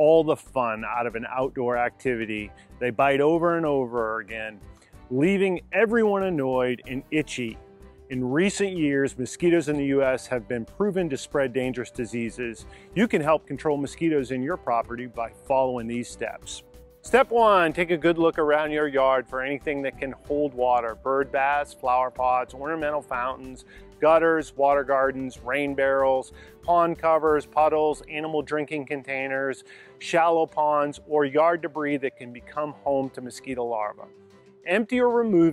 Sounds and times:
Speech: 0.0 - 34.1, 34.7 - 35.5
Music: 0.0 - 35.5.

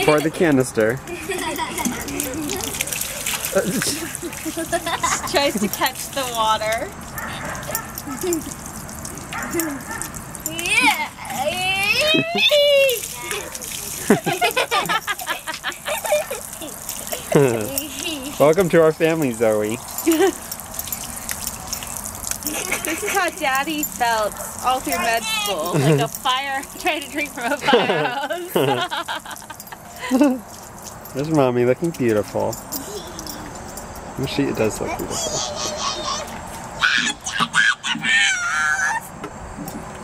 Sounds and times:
Gurgling: 1.1 - 6.2, 12.8 - 18.6.

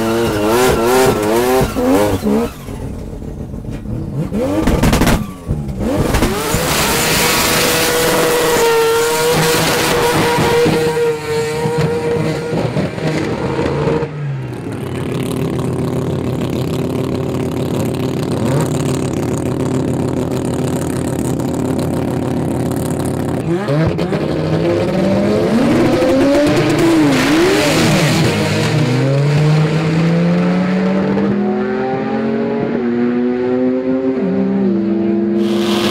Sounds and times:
Tire squeal: 4.9 - 5.6, 35.4 - 35.9.

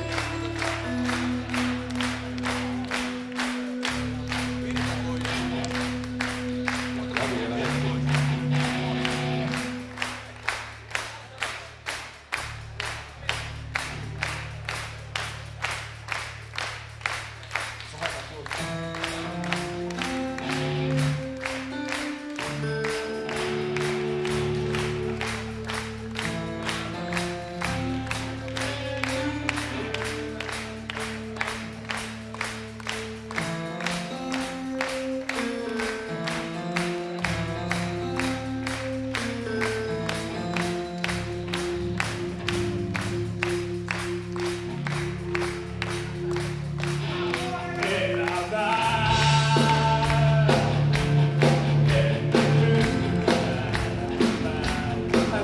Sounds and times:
Music: 0.0 - 55.4.

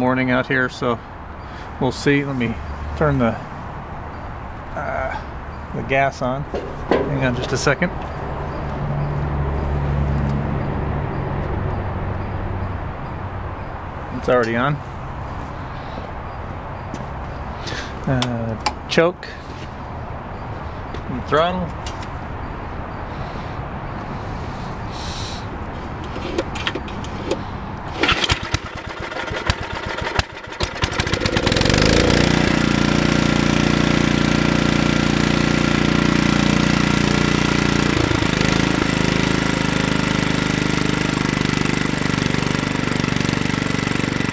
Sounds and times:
Speech: 0.0 - 1.0, 1.8 - 3.5, 4.8 - 5.2, 5.8 - 8.0, 14.1 - 14.8, 18.0 - 19.4, 21.1 - 21.8.

